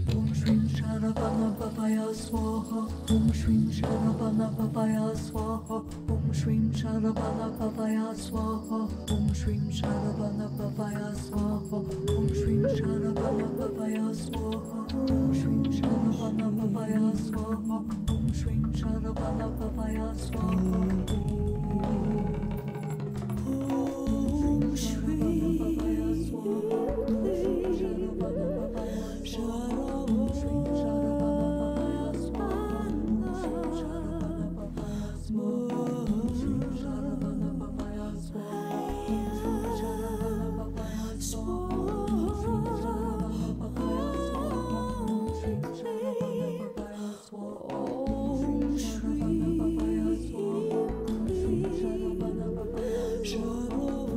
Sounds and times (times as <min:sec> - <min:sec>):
Mantra: 0:00.0 - 0:54.1.